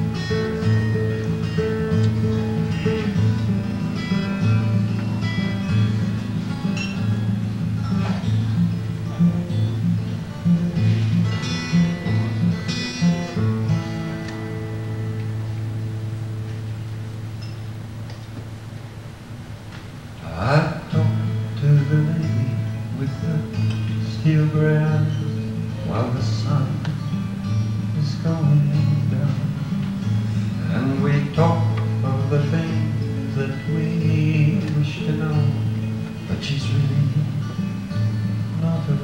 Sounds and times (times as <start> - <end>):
Music: 0.0 - 39.0.